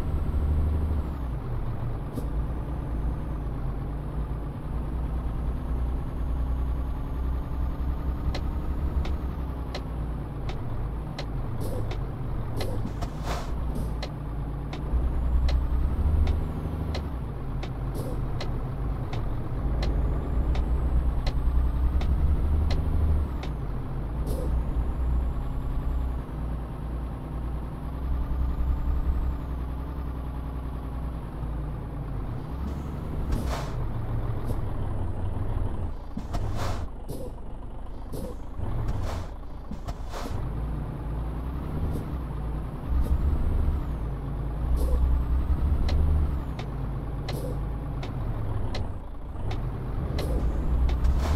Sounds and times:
Truck: 0:00.0 - 0:51.3.

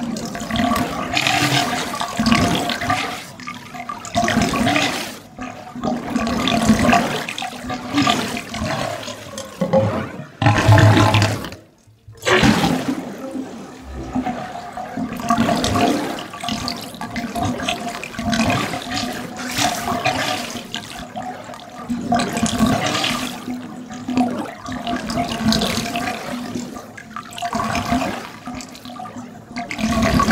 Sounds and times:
Sink (filling or washing): 0:00.0 - 0:09.8, 0:12.3 - 0:30.3
Water: 0:00.0 - 0:30.3.

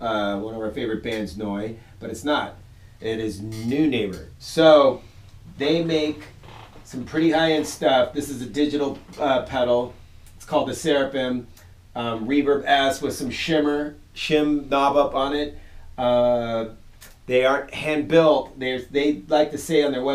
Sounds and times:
Speech: 0:00.0 - 0:20.1.

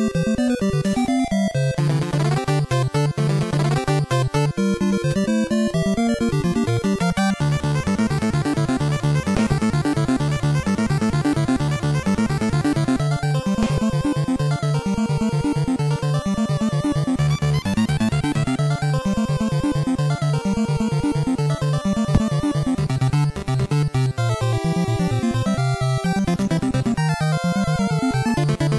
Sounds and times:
Video game music: 0:00.0 - 0:28.7.

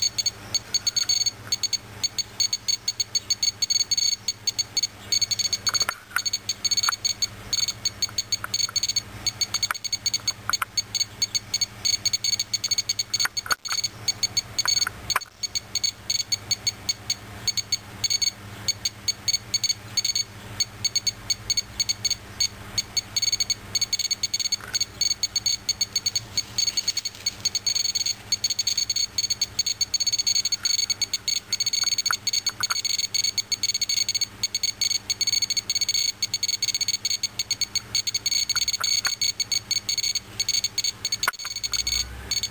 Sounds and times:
Beep, bleep: 0:00.0 - 0:42.5.

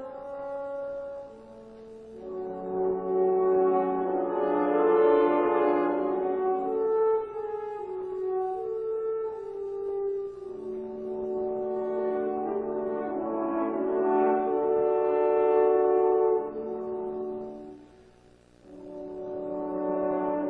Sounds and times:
French horn: 0:00.0 - 0:20.5.

